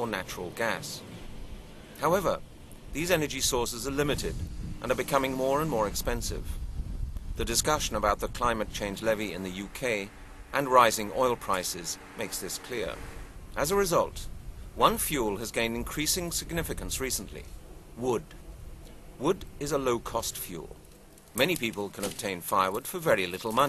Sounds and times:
Speech: 0:00.0 - 0:01.0, 0:02.0 - 0:02.4, 0:03.0 - 0:06.6, 0:07.4 - 0:13.0, 0:13.6 - 0:18.3, 0:19.2 - 0:20.8, 0:21.4 - 0:23.6.

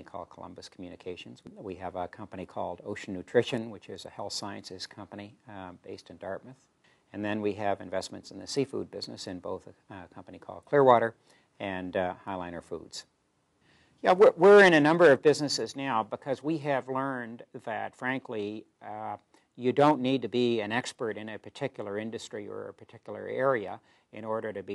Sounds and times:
Speech: 0:00.0 - 0:06.6, 0:07.2 - 0:13.1, 0:14.0 - 0:24.7.

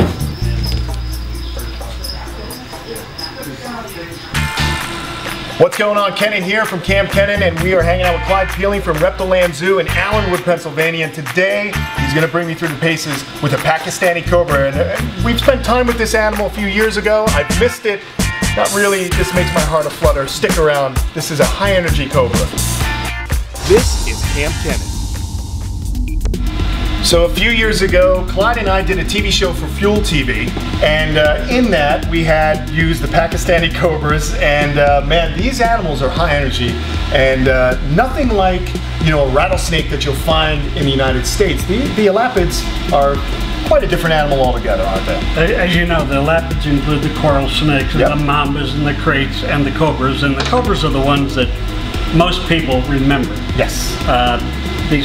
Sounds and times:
Music: 0:00.0 - 0:55.0
Speech: 0:01.6 - 0:04.4, 0:05.6 - 0:22.6, 0:23.6 - 0:24.9, 0:27.0 - 0:51.5, 0:52.1 - 0:55.0.

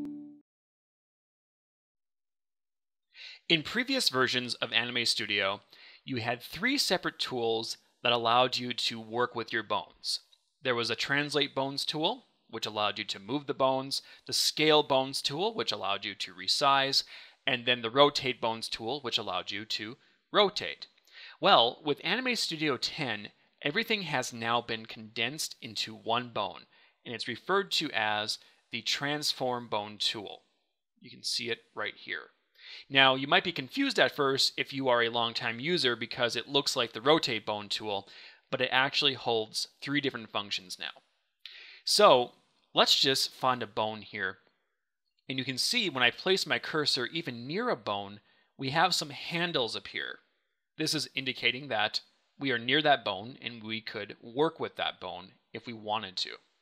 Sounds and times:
Speech: 0:03.4 - 0:30.5, 0:31.1 - 0:41.0, 0:41.8 - 0:44.4, 0:45.3 - 0:50.2, 0:50.8 - 0:56.4.

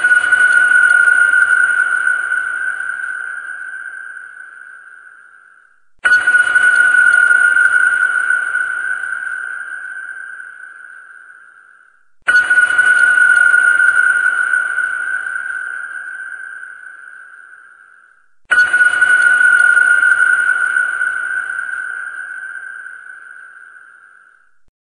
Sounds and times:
Ping: 0:00.0 - 0:24.7.

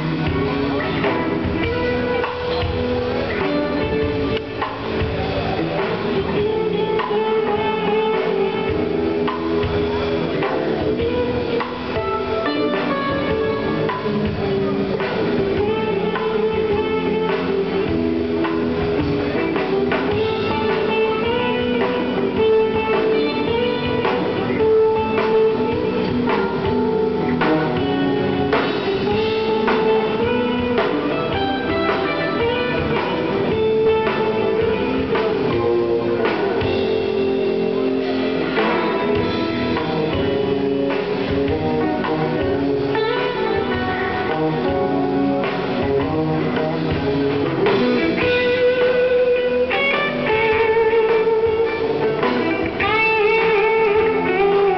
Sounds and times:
Electric guitar: 0:00.0 - 0:54.7.

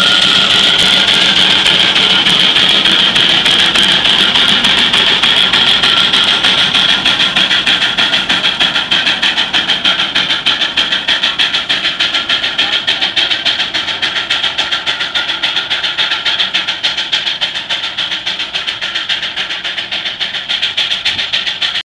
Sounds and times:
Heavy engine (low frequency): 0:00.0 - 0:21.8.

